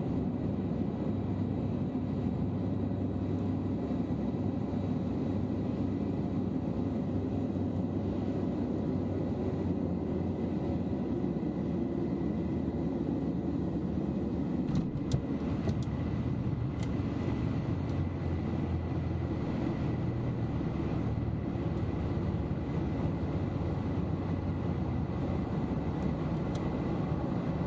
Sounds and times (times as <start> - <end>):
Field recording: 0.0 - 27.6
Fixed-wing aircraft, airplane: 0.0 - 27.6.